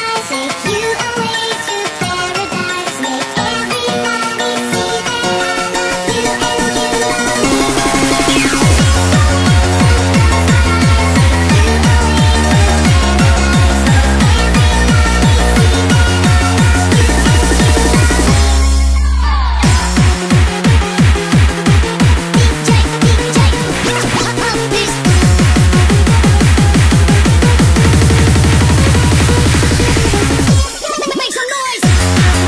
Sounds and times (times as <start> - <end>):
Techno: 0.0 - 32.4.